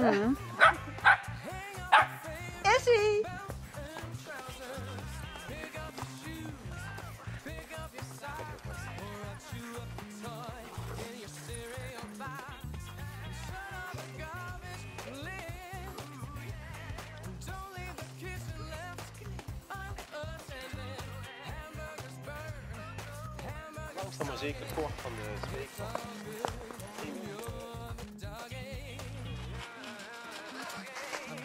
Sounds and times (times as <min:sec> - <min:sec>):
Music: 0:00.0 - 0:31.4
Speech: 0:02.6 - 0:03.3, 0:23.4 - 0:26.2, 0:26.8 - 0:27.6.